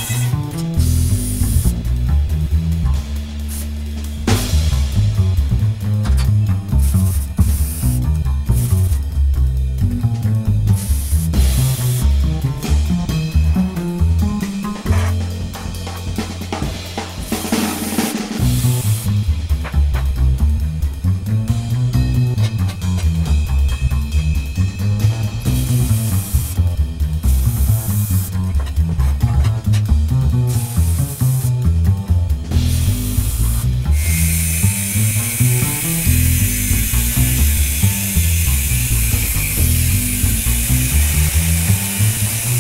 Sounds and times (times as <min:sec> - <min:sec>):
Drum roll: 0:01.6 - 0:10.5, 0:11.4 - 0:30.6.